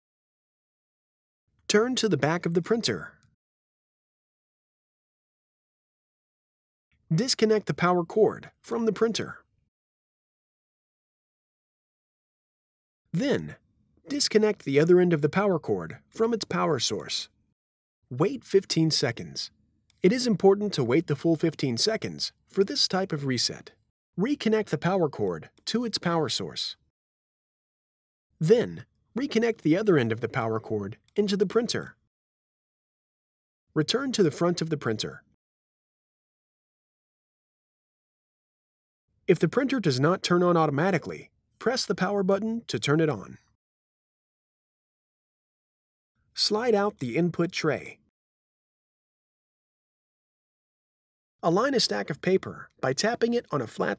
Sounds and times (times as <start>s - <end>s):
Speech: 1.7s - 3.2s, 7.1s - 9.4s, 13.2s - 17.3s, 18.1s - 26.8s, 28.4s - 32.0s, 33.8s - 35.3s, 39.3s - 43.5s, 46.4s - 48.1s, 51.4s - 53.9s.